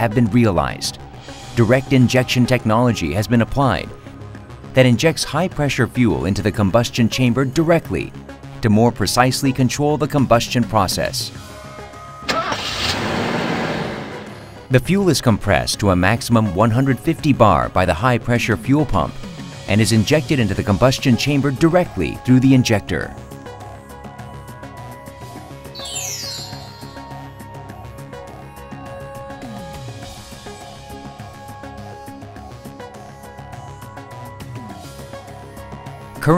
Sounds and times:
Speech: 0:00.0 - 0:01.0, 0:01.6 - 0:03.9, 0:04.8 - 0:11.4, 0:14.7 - 0:23.2
Music: 0:00.0 - 0:36.3.

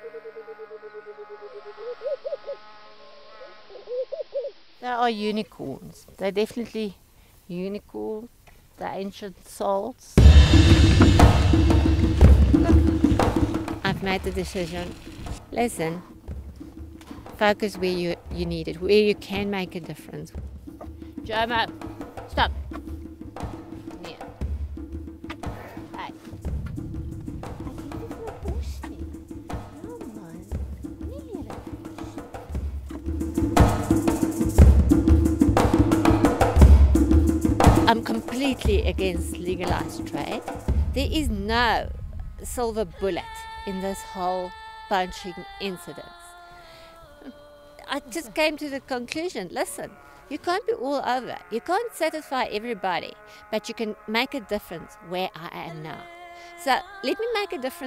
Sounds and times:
Wild animals: 0:00.0 - 0:04.6, 0:49.8 - 0:55.2
Speech: 0:04.8 - 0:10.2, 0:13.8 - 0:16.0, 0:17.4 - 0:20.4, 0:21.2 - 0:21.7, 0:27.7 - 0:29.1, 0:31.1 - 0:31.6, 0:37.9 - 0:40.4, 0:41.0 - 0:46.3, 0:47.2 - 0:57.8
Music: 0:10.2 - 0:57.8.

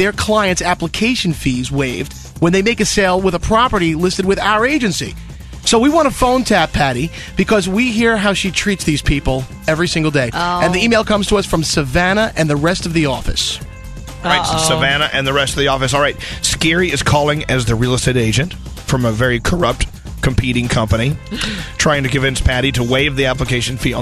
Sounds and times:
Speech: 0:00.0 - 0:13.6, 0:14.2 - 0:24.0
Music: 0:00.0 - 0:24.0.

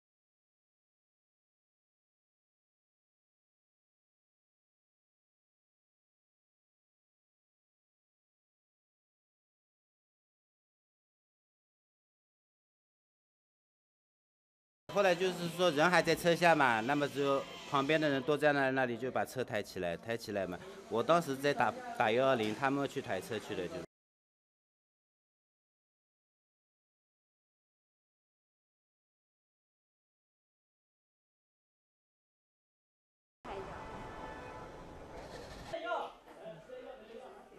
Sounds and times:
Speech: 0:14.9 - 0:23.9, 0:35.7 - 0:37.5.

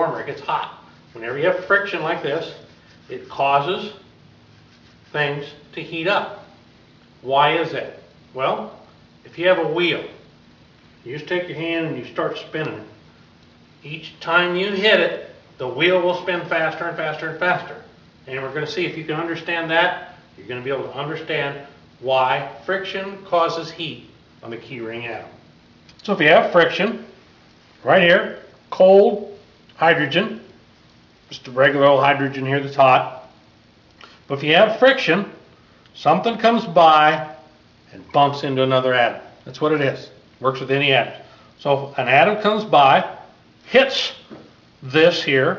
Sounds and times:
Speech: 0:00.0 - 0:04.1, 0:05.1 - 0:06.5, 0:07.2 - 0:10.2, 0:11.0 - 0:13.0, 0:13.8 - 0:25.4, 0:26.0 - 0:27.1, 0:27.8 - 0:30.5, 0:31.3 - 0:33.3, 0:34.3 - 0:45.5.

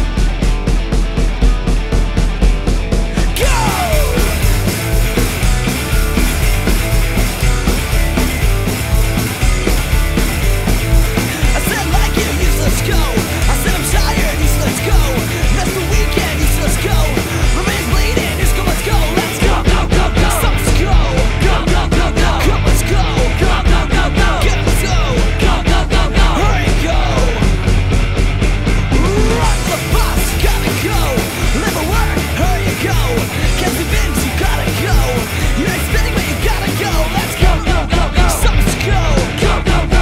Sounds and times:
Music: 0:00.0 - 0:40.0.

